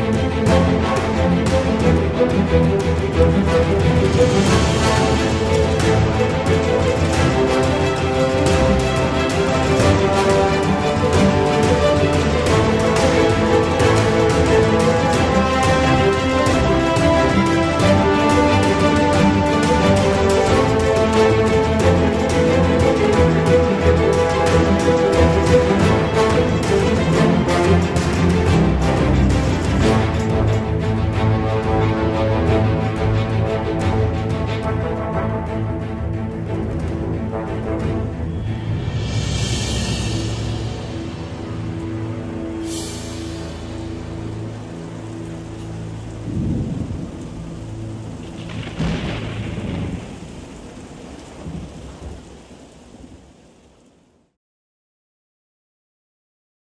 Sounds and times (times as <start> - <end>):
Music: 0.0 - 52.5
Thunderstorm: 44.5 - 54.3.